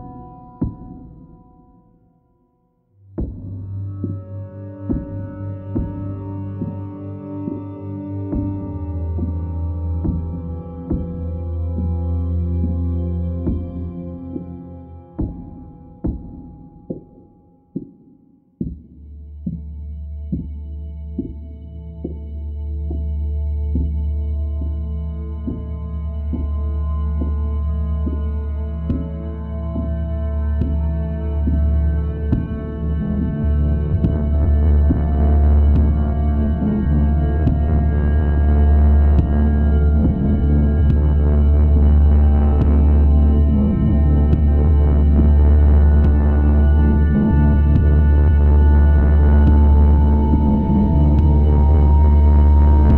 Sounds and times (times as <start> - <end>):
Soundtrack music: 3.1 - 17.9, 19.2 - 52.9.